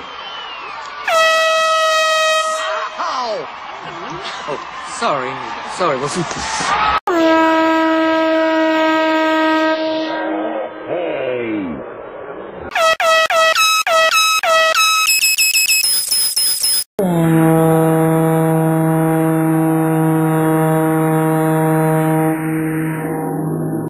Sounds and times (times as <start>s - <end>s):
Outside, urban or manmade: 0.0s - 23.9s.